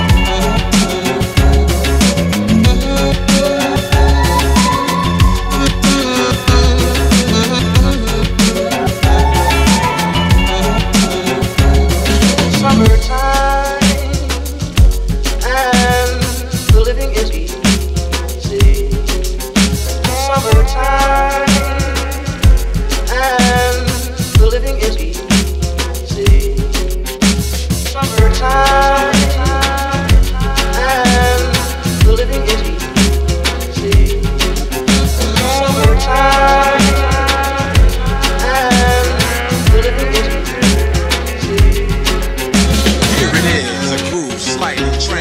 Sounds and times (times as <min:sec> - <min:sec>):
Music: 0:00.0 - 0:45.2.